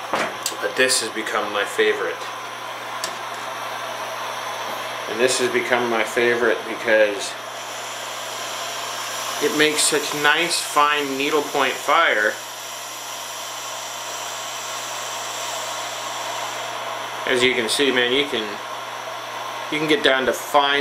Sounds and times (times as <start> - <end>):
Power tool: 0.0 - 20.8.